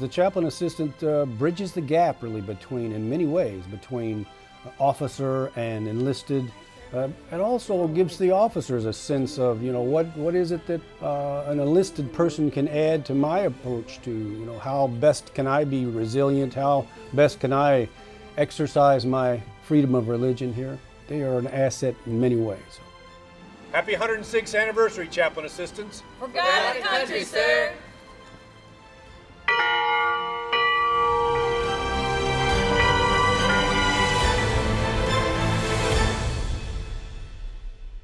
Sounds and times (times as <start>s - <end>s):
Church bell: 29.5s - 34.8s.